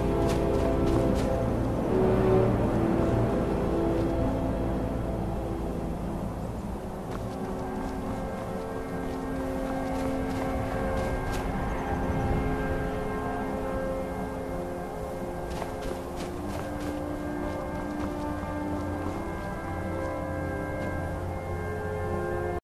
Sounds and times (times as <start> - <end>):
Walk, footsteps: 0.0 - 1.6, 7.1 - 11.7, 15.5 - 21.1
Music: 0.0 - 22.6.